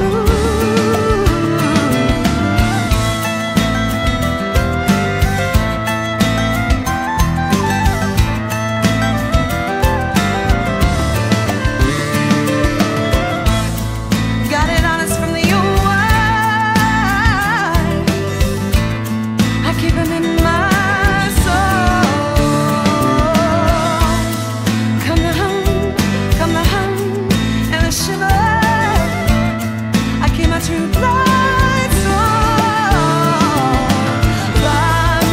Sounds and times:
Guitar: 0.0 - 35.3
Independent music: 0.0 - 35.3.

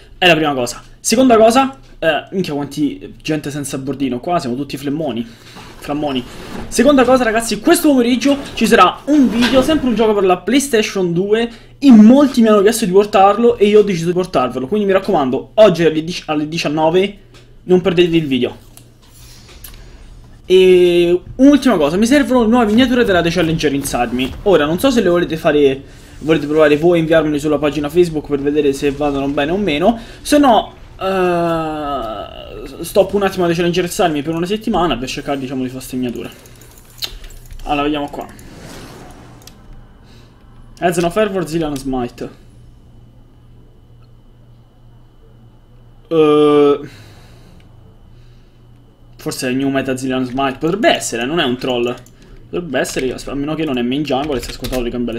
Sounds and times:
Speech: 0.2 - 18.6, 20.5 - 36.4, 37.6 - 38.4, 40.8 - 42.4, 46.1 - 46.9, 49.2 - 55.1.

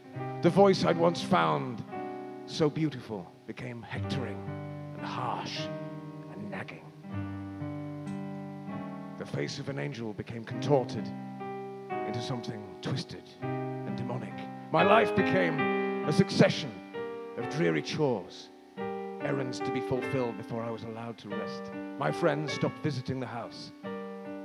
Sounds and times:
Music: 0.0 - 24.4
Speech: 0.4 - 1.8, 2.5 - 4.4, 5.0 - 5.7, 6.3 - 6.9, 9.2 - 11.1, 12.1 - 16.8, 17.4 - 18.5, 19.2 - 23.7.

